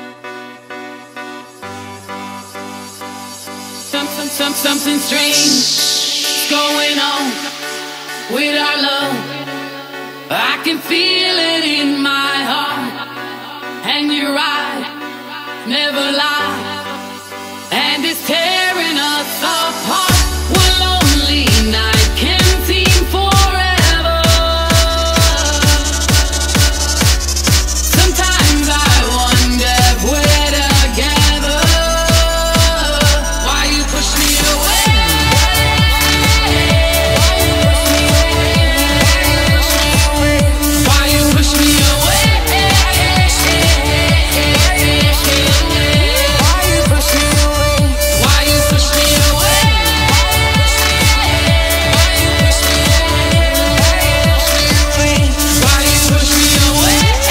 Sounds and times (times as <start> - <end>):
Pop music: 0.0 - 57.3.